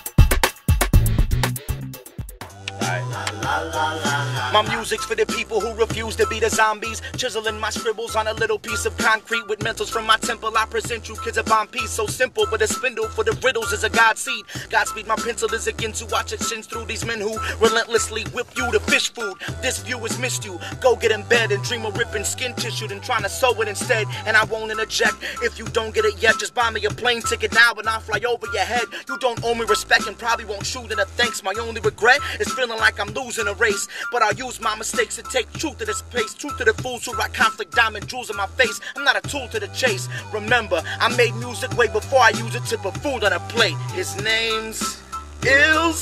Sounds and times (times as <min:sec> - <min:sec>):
Music: 0:00.0 - 0:46.0.